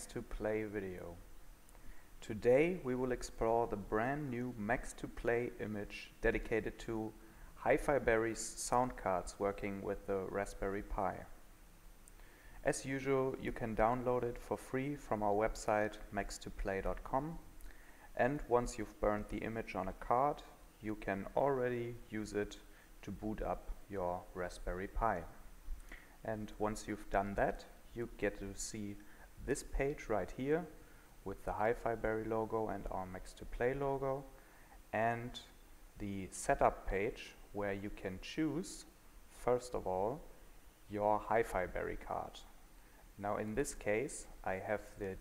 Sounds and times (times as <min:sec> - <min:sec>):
Speech: 0:00.0 - 0:01.2, 0:02.2 - 0:11.4, 0:12.6 - 0:17.5, 0:18.2 - 0:25.4, 0:26.2 - 0:40.3, 0:40.9 - 0:42.6, 0:43.2 - 0:45.2.